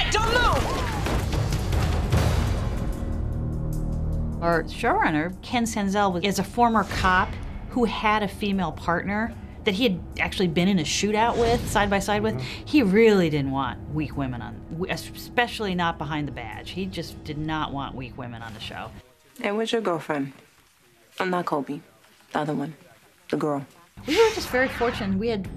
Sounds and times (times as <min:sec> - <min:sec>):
Female speech, woman speaking: 0:00.0 - 0:01.0, 0:04.4 - 0:20.4, 0:21.2 - 0:25.5
Music: 0:00.0 - 0:19.0, 0:24.0 - 0:25.5.